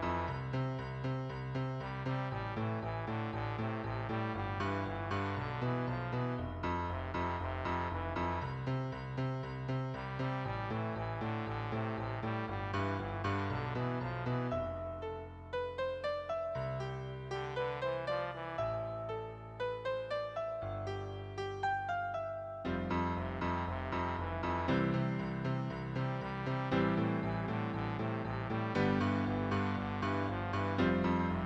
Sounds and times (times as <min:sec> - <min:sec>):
Trombone: 0:00.0 - 0:15.7, 0:17.3 - 0:20.6, 0:22.7 - 0:31.4.